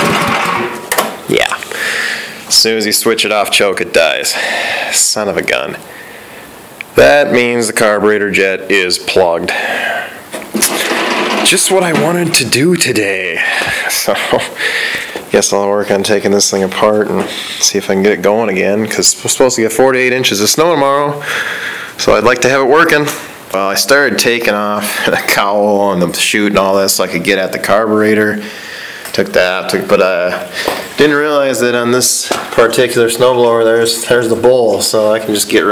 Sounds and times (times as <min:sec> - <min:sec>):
Speech: 0:01.3 - 0:01.6, 0:02.5 - 0:05.8, 0:07.0 - 0:09.6, 0:11.4 - 0:14.5, 0:15.3 - 0:21.2, 0:22.0 - 0:28.4, 0:29.1 - 0:35.7.